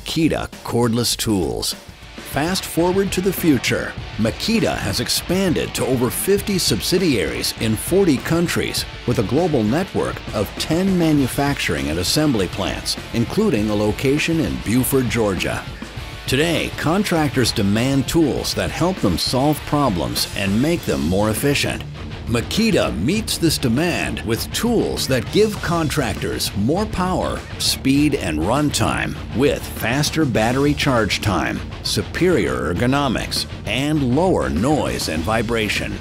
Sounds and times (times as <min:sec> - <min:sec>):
Music: 0:00.0 - 0:36.0
Speech: 0:00.0 - 0:36.0.